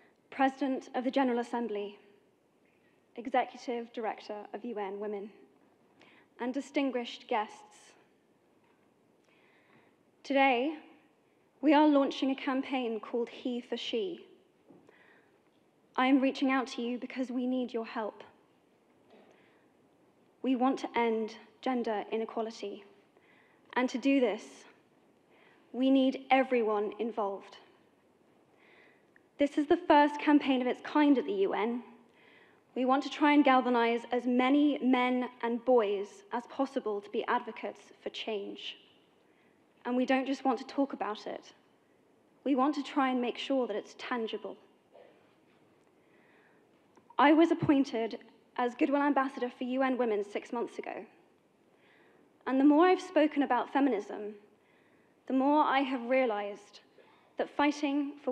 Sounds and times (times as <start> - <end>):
Narration, monologue: 0.0 - 58.3
Female speech, woman speaking: 0.4 - 2.0, 3.2 - 5.4, 6.4 - 8.0, 10.3 - 10.9, 11.6 - 14.3, 16.0 - 18.4, 20.5 - 22.9, 23.8 - 24.7, 25.8 - 27.7, 29.4 - 32.0, 32.8 - 38.8, 39.9 - 41.6, 42.5 - 44.6, 47.2 - 51.2, 52.5 - 54.4, 55.3 - 56.8, 57.4 - 58.3.